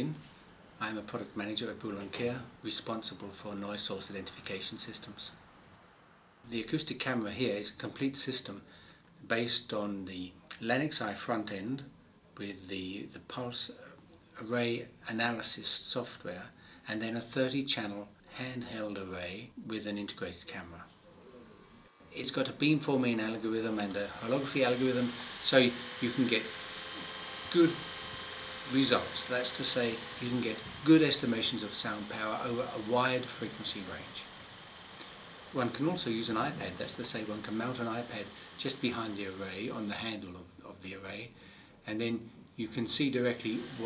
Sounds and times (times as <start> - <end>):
Speech: 0.0 - 0.2, 0.8 - 5.4, 6.5 - 20.9, 22.1 - 26.5, 27.5 - 27.8, 28.7 - 34.3, 35.6 - 43.8.